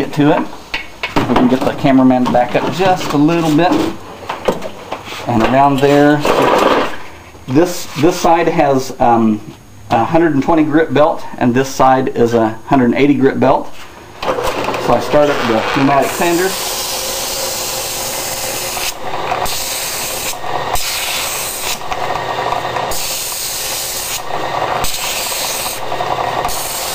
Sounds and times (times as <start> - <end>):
Speech: 0.0 - 0.5, 1.3 - 4.0, 5.2 - 6.3, 7.5 - 13.7, 14.8 - 16.6.